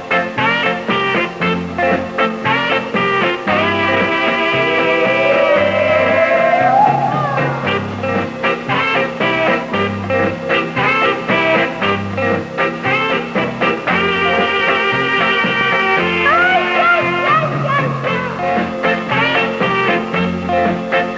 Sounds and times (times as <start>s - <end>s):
Music: 0.0s - 21.1s.